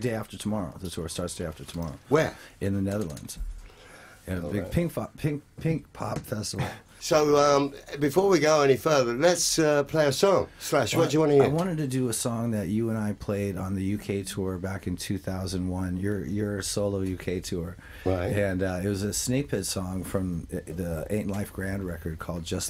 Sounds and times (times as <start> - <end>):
Speech: 0.0 - 3.4, 4.3 - 22.7.